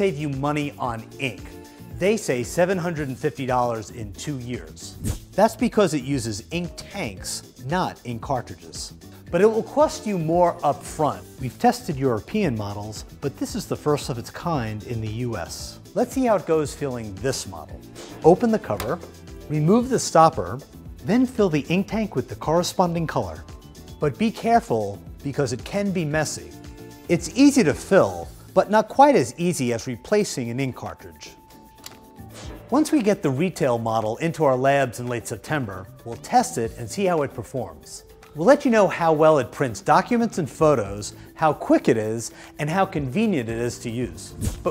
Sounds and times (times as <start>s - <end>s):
Speech: 0.0s - 31.4s, 32.7s - 44.7s
Music: 0.0s - 44.7s.